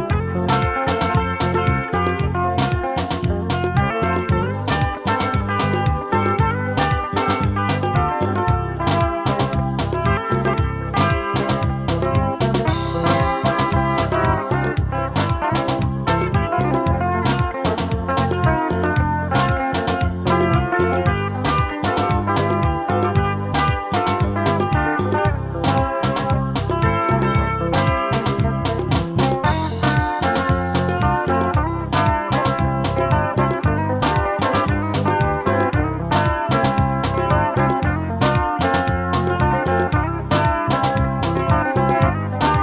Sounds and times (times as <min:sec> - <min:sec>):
Music: 0:00.0 - 0:42.6.